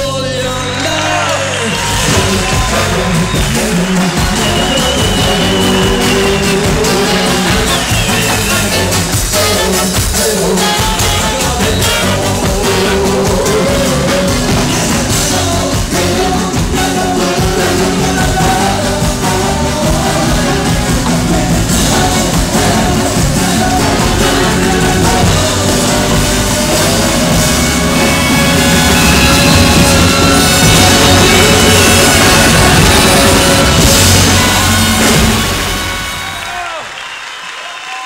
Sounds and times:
Singing: 0:00.0 - 0:36.5
Music: 0:00.0 - 0:38.0.

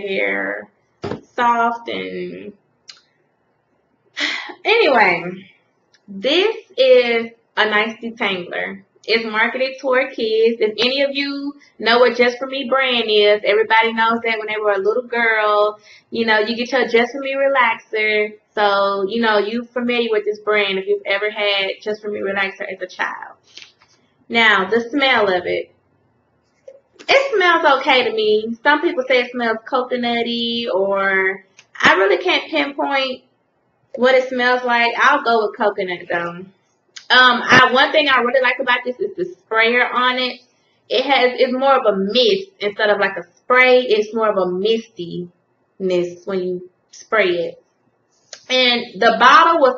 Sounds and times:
Speech: 0:00.0 - 0:02.5, 0:04.2 - 0:05.5, 0:06.1 - 0:23.7, 0:24.3 - 0:25.7, 0:27.0 - 0:33.2, 0:34.0 - 0:47.6, 0:48.4 - 0:49.7
Inside, small room: 0:00.0 - 0:49.7.

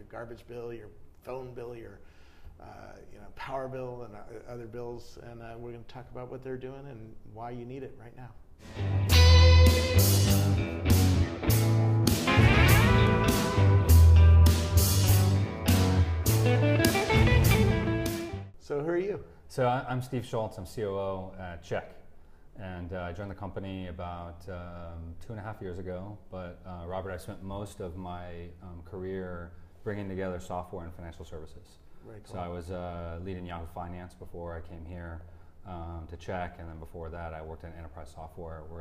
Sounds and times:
Speech: 0:00.0 - 0:02.0, 0:02.6 - 0:08.4, 0:18.6 - 0:22.0, 0:22.6 - 0:38.8
Music: 0:08.6 - 0:18.5.

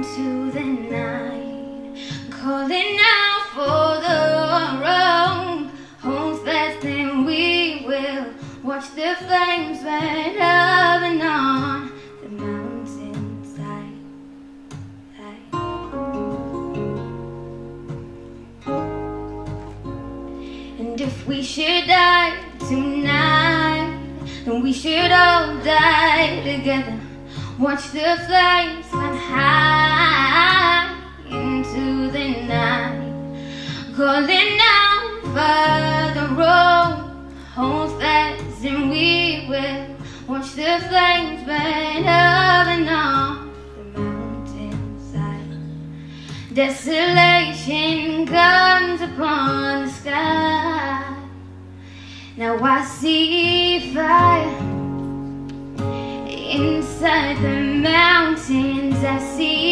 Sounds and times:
Female singing: 0:00.0 - 0:14.0, 0:20.8 - 0:27.0, 0:27.6 - 0:33.1, 0:33.8 - 0:45.6, 0:46.5 - 0:51.3, 0:52.4 - 0:54.8, 0:56.3 - 0:59.7
Music: 0:00.0 - 0:59.7.

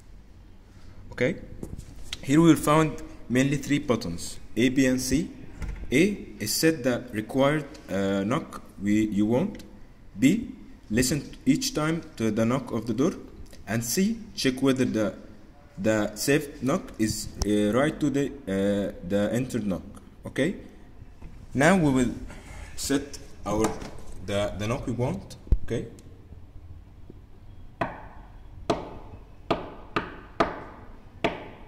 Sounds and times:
Speech: 0:01.1 - 0:01.5, 0:02.2 - 0:09.6, 0:10.2 - 0:15.2, 0:15.8 - 0:20.6, 0:21.6 - 0:26.0.

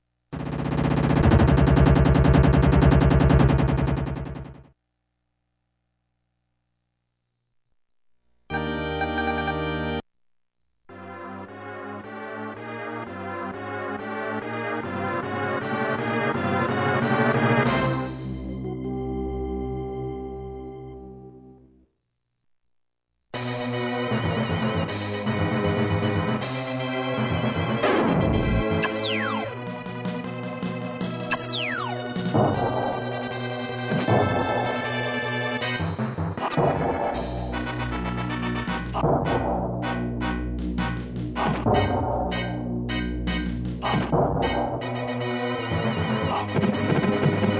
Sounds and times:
Music: 0:08.5 - 0:10.0, 0:10.9 - 0:21.8, 0:23.4 - 0:47.5.

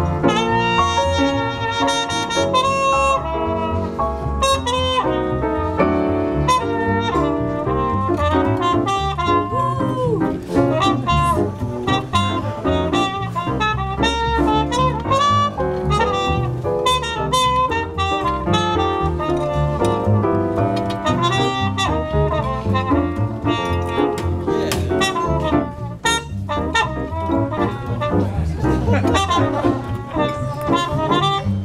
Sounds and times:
Trumpet: 0:00.0 - 0:31.6.

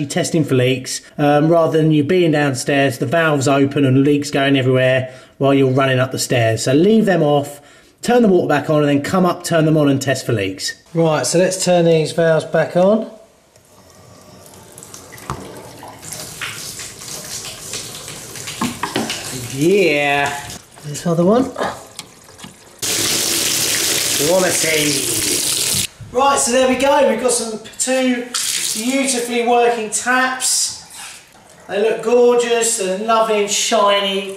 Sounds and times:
Water: 0:13.6 - 0:24.9
Sink (filling or washing): 0:13.7 - 0:25.9, 0:28.3 - 0:29.3
Water tap, faucet: 0:13.7 - 0:25.9, 0:28.3 - 0:29.2.

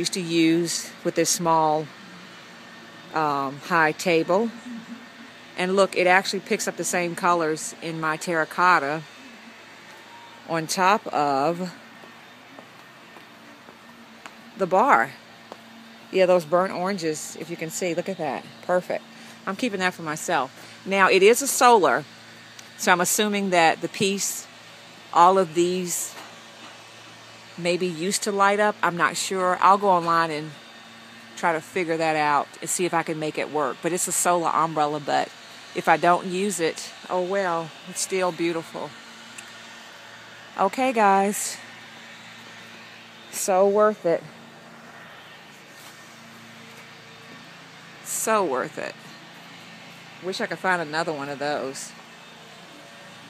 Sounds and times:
Speech: 0:00.0 - 0:01.9, 0:03.1 - 0:04.9, 0:05.6 - 0:09.1, 0:10.5 - 0:11.8, 0:14.6 - 0:15.2, 0:16.2 - 0:22.1, 0:22.8 - 0:24.5, 0:25.2 - 0:26.2, 0:27.6 - 0:30.6, 0:31.4 - 0:39.0, 0:40.6 - 0:41.6, 0:43.4 - 0:44.3, 0:48.1 - 0:49.0, 0:50.2 - 0:52.0
Outside, urban or manmade: 0:00.0 - 0:53.3.

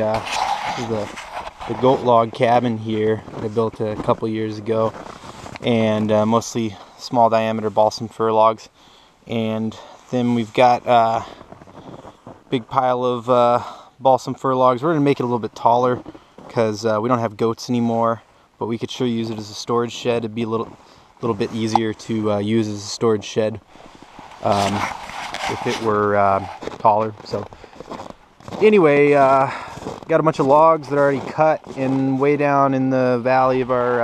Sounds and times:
Speech: 0:00.0 - 0:05.0, 0:05.6 - 0:08.7, 0:09.3 - 0:11.4, 0:12.5 - 0:23.6, 0:24.4 - 0:24.9, 0:25.5 - 0:27.5, 0:28.6 - 0:34.0.

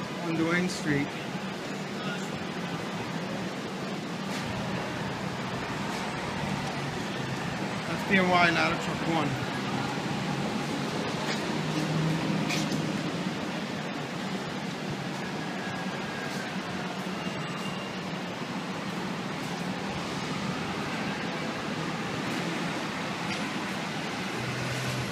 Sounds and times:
Speech: 0:07.9 - 0:09.4.

